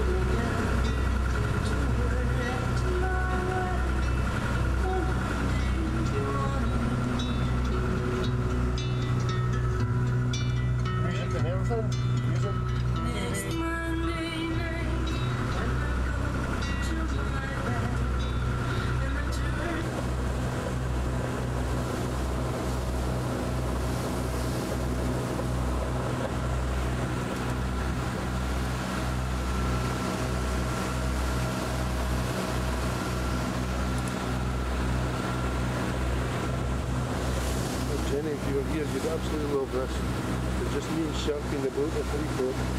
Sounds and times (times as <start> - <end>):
Music: 0.0 - 19.9.